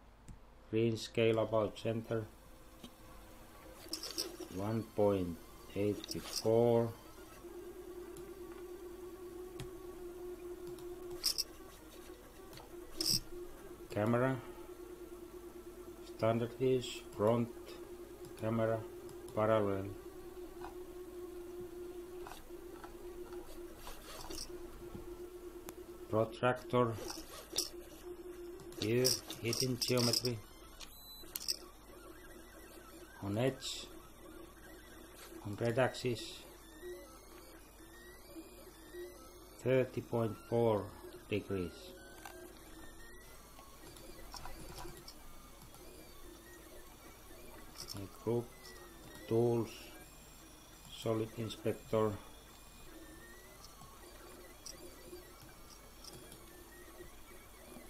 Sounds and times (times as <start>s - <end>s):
Speech: 0.7s - 2.3s, 33.2s - 33.9s, 35.4s - 36.5s, 39.6s - 41.9s, 49.3s - 50.0s, 50.9s - 52.2s.